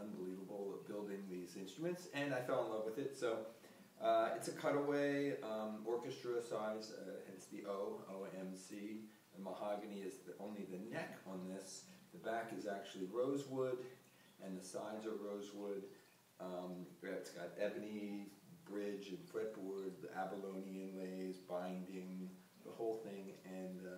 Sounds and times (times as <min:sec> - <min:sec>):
Speech: 0:00.0 - 0:23.9.